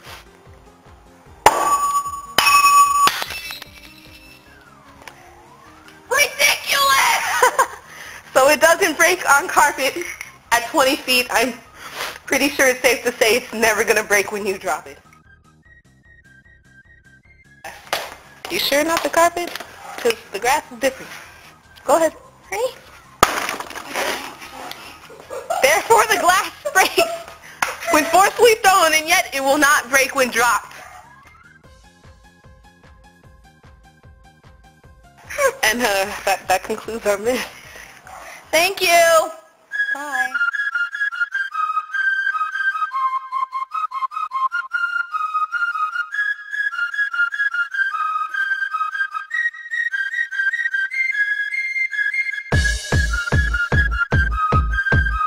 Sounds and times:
Music: 0:00.0 - 0:55.2
Breaking: 0:03.0 - 0:04.2, 0:23.2 - 0:24.5.

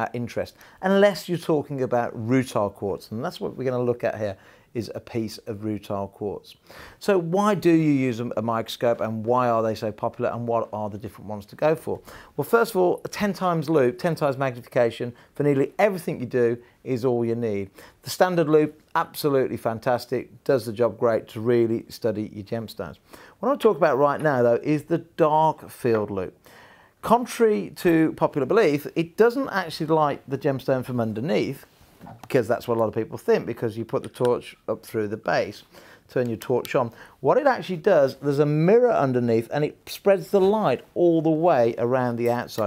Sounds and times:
Speech: 0:00.0 - 0:26.4, 0:27.0 - 0:42.6.

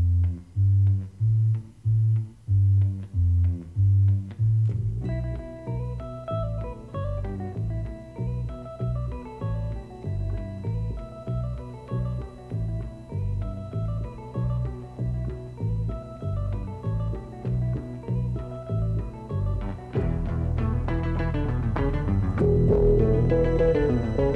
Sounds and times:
Music: 0:00.0 - 0:24.3.

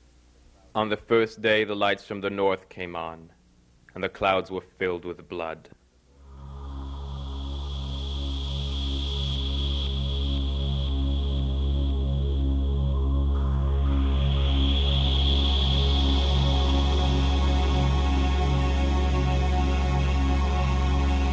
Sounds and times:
Electronica: 0:06.1 - 0:21.3.

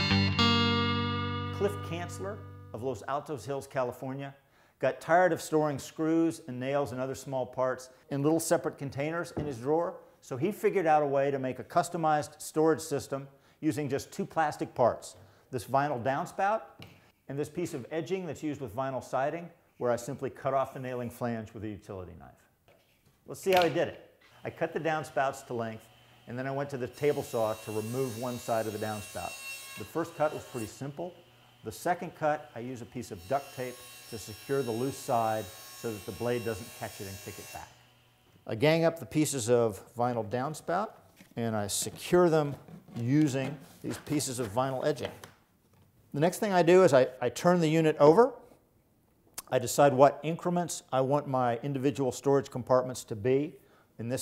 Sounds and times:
Speech: 0:01.6 - 0:16.7, 0:17.3 - 0:22.5, 0:23.3 - 0:37.7, 0:38.5 - 0:45.2, 0:46.1 - 0:48.4, 0:49.4 - 0:54.2.

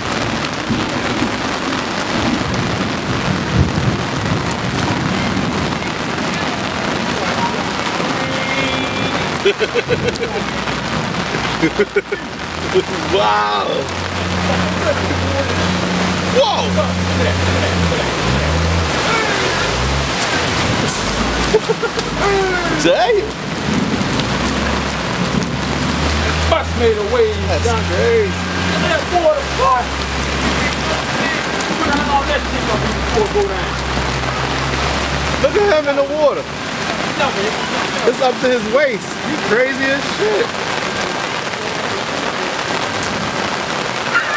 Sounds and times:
Rain on surface: 0:00.0 - 0:44.3
Speech: 0:12.1 - 0:15.7, 0:16.4 - 0:18.2, 0:22.2 - 0:23.4, 0:30.6 - 0:33.8.

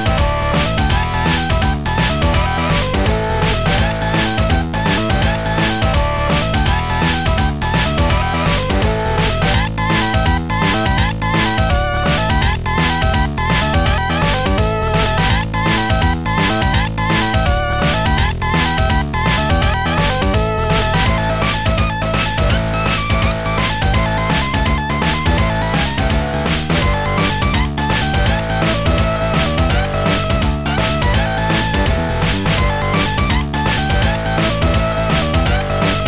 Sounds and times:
Video game music: 0:00.0 - 0:36.0.

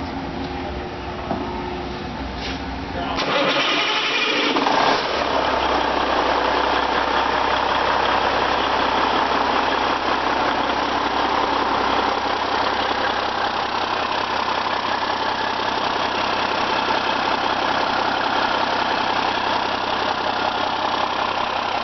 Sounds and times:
Engine: 0:00.0 - 0:21.8.

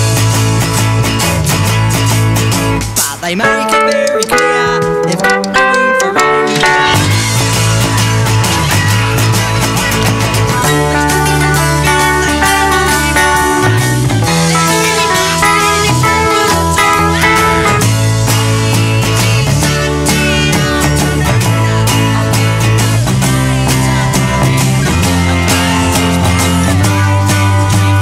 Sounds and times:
Acoustic guitar: 0:00.0 - 0:28.0
Strum: 0:00.0 - 0:28.0.

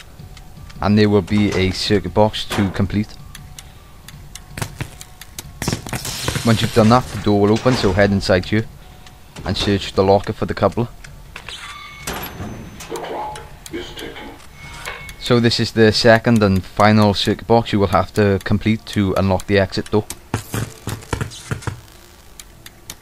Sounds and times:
Speech: 0:00.8 - 0:03.2, 0:06.4 - 0:08.7, 0:09.4 - 0:10.9, 0:13.7 - 0:14.4, 0:15.2 - 0:20.0.

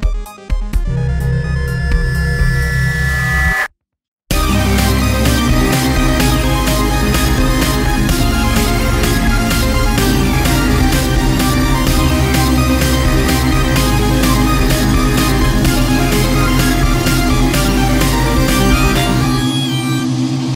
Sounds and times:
Music: 0:00.0 - 0:03.2, 0:04.3 - 0:20.5.

